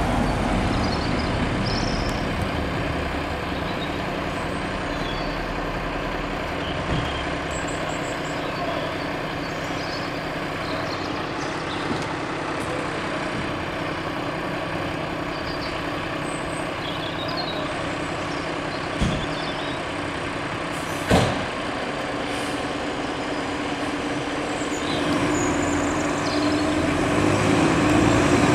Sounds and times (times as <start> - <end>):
Vehicle: 0.0 - 28.5.